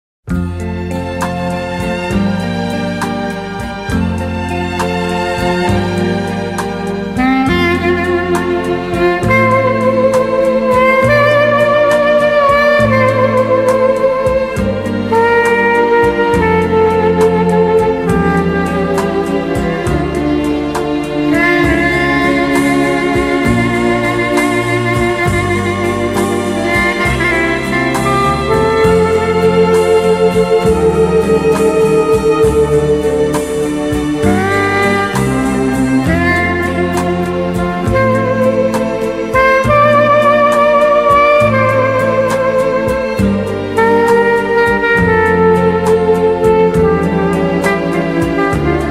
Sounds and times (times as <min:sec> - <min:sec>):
Rhythm and blues: 0:00.3 - 0:48.9
Soundtrack music: 0:00.3 - 0:48.9.